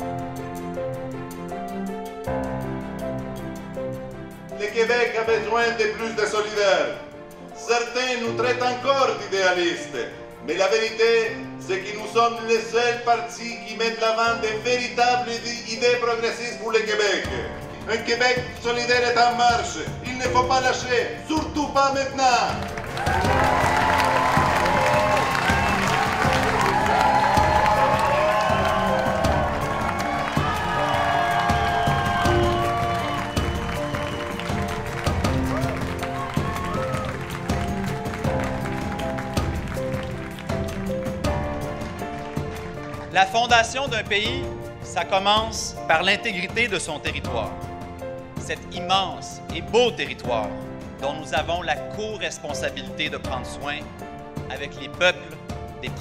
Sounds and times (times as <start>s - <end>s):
Music: 0.0s - 56.0s.